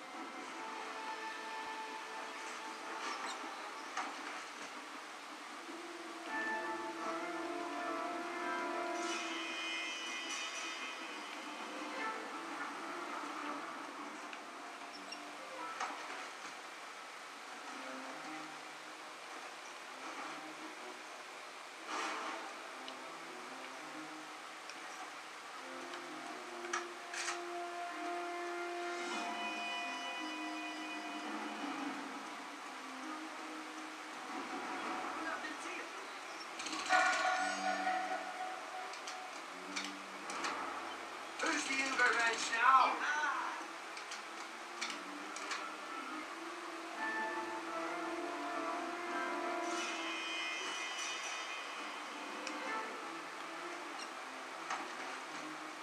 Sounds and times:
Speech: 41.4s - 43.7s.

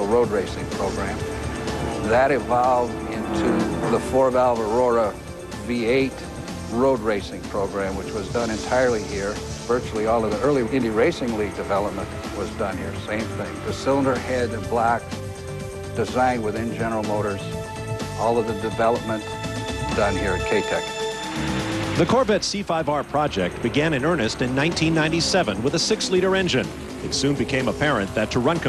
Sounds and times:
Speech: 0.0s - 1.2s, 2.0s - 15.0s, 16.0s - 17.5s, 18.2s - 19.2s, 19.8s - 20.8s, 22.0s - 28.6s
Music: 0.0s - 28.6s.

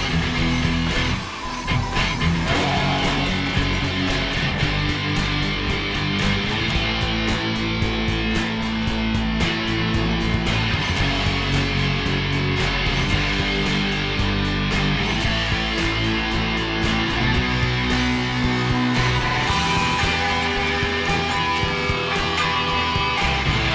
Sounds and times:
Acoustic guitar: 0.0s - 23.7s
Bass guitar: 0.0s - 23.7s
Strum: 0.0s - 23.7s.

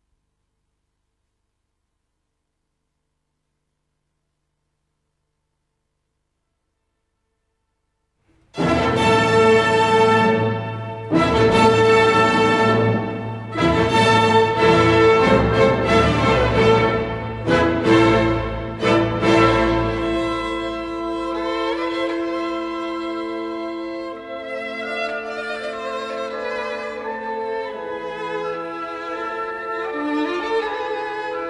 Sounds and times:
Violin, fiddle: 8.6s - 31.4s.

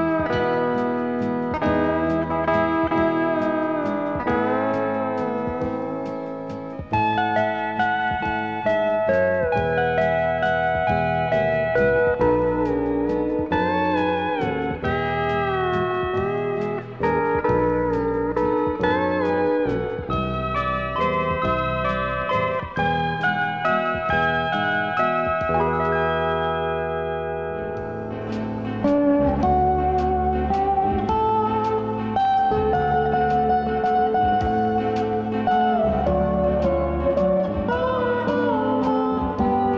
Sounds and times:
Steel guitar, slide guitar: 0.0s - 39.7s.

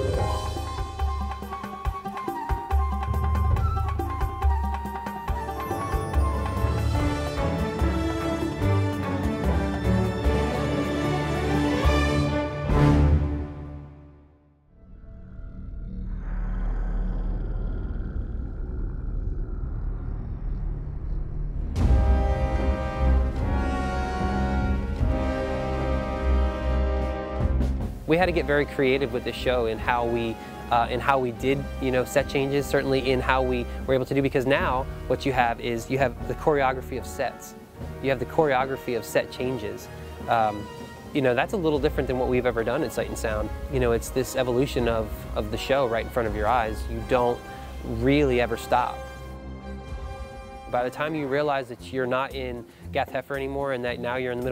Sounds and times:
Music: 0.0s - 15.0s, 21.4s - 54.5s
Speech: 28.1s - 49.0s, 50.7s - 54.5s.

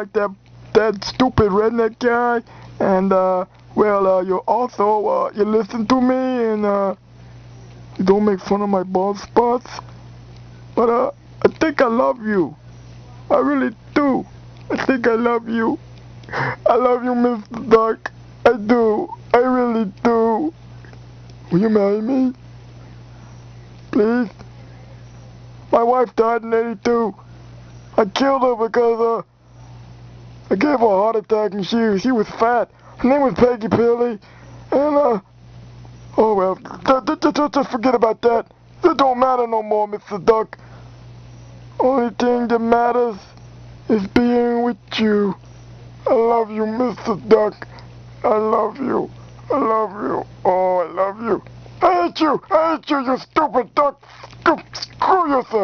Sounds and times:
Speech: 0.0s - 7.0s, 8.0s - 9.9s, 10.8s - 12.6s, 13.2s - 15.8s, 16.6s - 20.6s, 21.5s - 22.4s, 23.9s - 25.1s, 25.7s - 27.2s, 28.0s - 29.3s, 30.5s - 35.3s, 36.2s - 40.6s, 41.8s - 43.3s, 43.9s - 45.4s, 46.0s - 55.6s.

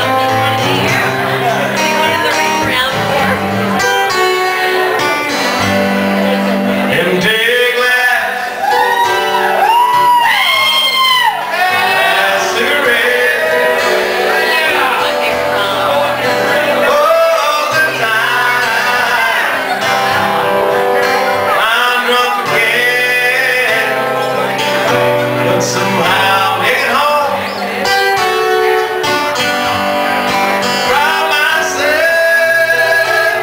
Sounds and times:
Music: 0.0s - 33.4s.

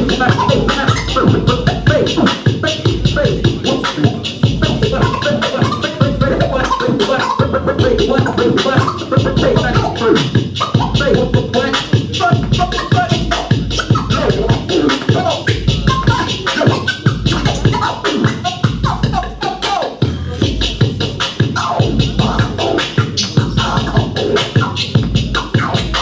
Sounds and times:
Speech: 0.0s - 10.2s, 11.0s - 18.0s, 19.2s - 26.0s
Electronic music: 0.0s - 26.0s
Scratching (performance technique): 0.0s - 26.0s.

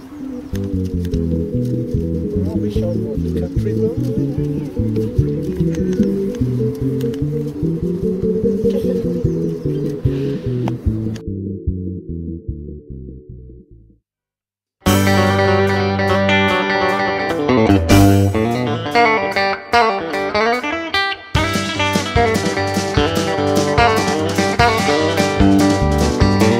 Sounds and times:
Tapping (guitar technique): 14.9s - 26.5s.

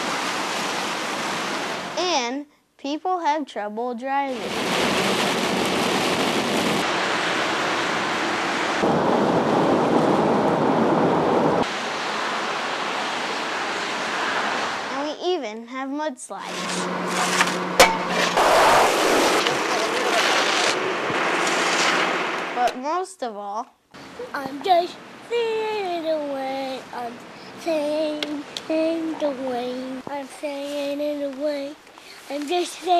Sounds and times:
Rain on surface: 0.0s - 2.2s, 4.3s - 15.2s, 18.9s - 22.7s, 24.0s - 32.9s
Speech: 2.0s - 4.5s, 14.9s - 16.7s, 19.4s - 20.8s, 22.6s - 32.9s.

